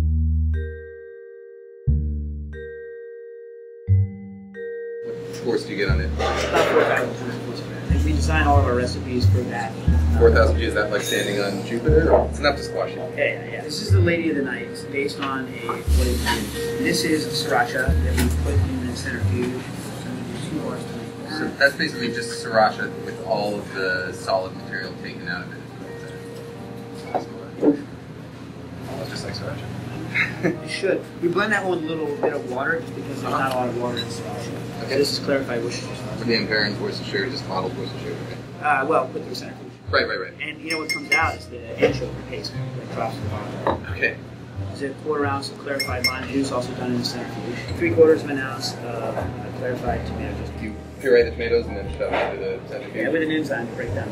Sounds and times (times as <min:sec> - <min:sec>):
Music: 0:00.0 - 0:54.1
Speech: 0:05.4 - 0:25.6, 0:30.7 - 0:54.1.